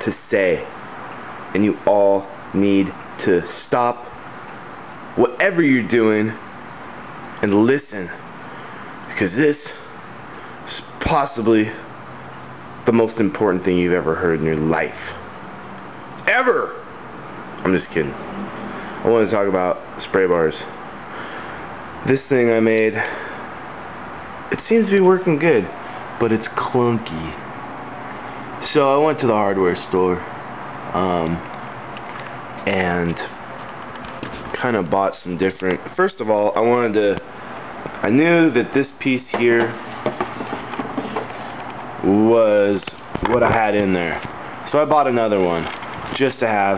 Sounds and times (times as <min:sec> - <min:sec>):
Speech: 0:00.0 - 0:00.8, 0:01.5 - 0:04.2, 0:05.2 - 0:06.4, 0:07.4 - 0:08.2, 0:09.1 - 0:09.9, 0:10.7 - 0:11.9, 0:12.8 - 0:15.2, 0:16.2 - 0:16.9, 0:17.6 - 0:18.2, 0:19.0 - 0:20.8, 0:22.0 - 0:23.3, 0:24.5 - 0:27.5, 0:28.6 - 0:30.3, 0:30.9 - 0:31.5, 0:32.6 - 0:33.4, 0:34.5 - 0:37.3, 0:38.0 - 0:39.8, 0:42.0 - 0:46.7.